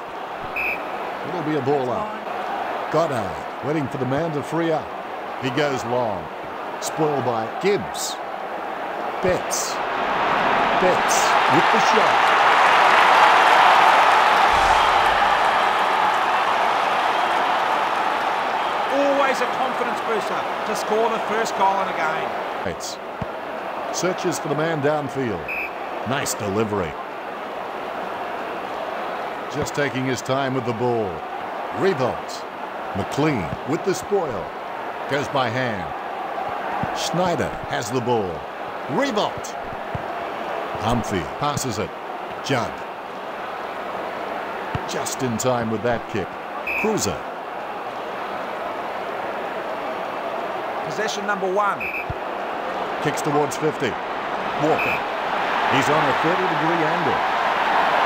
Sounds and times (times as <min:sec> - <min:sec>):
Speech: 0:01.2 - 0:02.3, 0:02.9 - 0:08.2, 0:09.2 - 0:09.8, 0:10.8 - 0:12.2, 0:18.9 - 0:23.0, 0:23.9 - 0:25.5, 0:26.1 - 0:27.0, 0:29.5 - 0:31.2, 0:31.8 - 0:32.4, 0:33.0 - 0:34.5, 0:35.1 - 0:35.9, 0:36.9 - 0:39.6, 0:40.8 - 0:41.9, 0:42.5 - 0:42.8, 0:44.8 - 0:47.2, 0:50.9 - 0:51.8, 0:53.0 - 0:54.0, 0:54.6 - 0:55.0, 0:55.7 - 0:57.2.